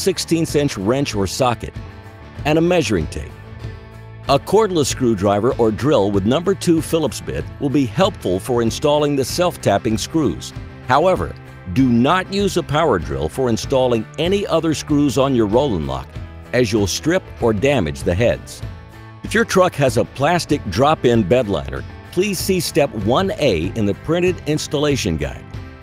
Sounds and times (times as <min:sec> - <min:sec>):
Speech: 0:00.0 - 0:01.8, 0:02.4 - 0:03.3, 0:04.3 - 0:18.6, 0:19.3 - 0:25.4
Music: 0:00.0 - 0:25.8.